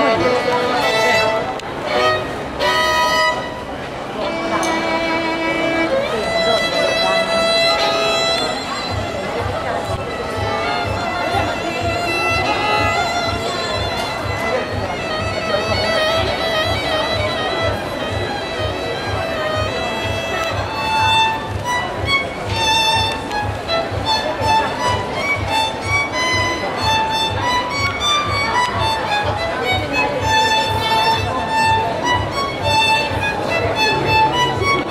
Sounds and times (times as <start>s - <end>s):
Speech: 0.0s - 34.9s
Violin, fiddle: 0.0s - 34.9s.